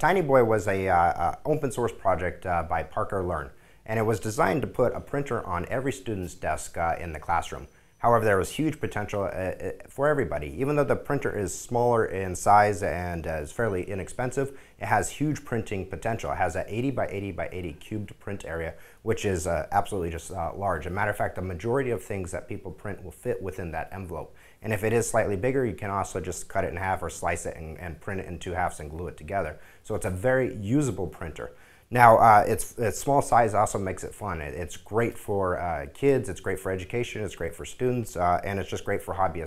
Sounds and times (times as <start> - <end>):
Speech: 0.0 - 39.4.